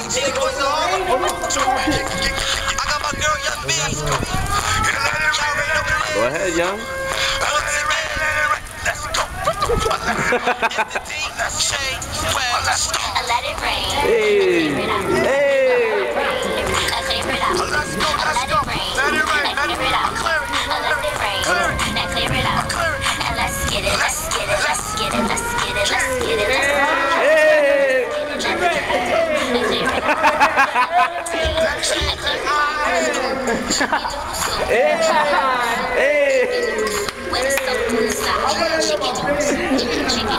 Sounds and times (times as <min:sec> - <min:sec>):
Speech: 0:00.0 - 0:06.8, 0:09.0 - 0:22.6, 0:23.8 - 0:40.3
Music: 0:00.0 - 0:40.3.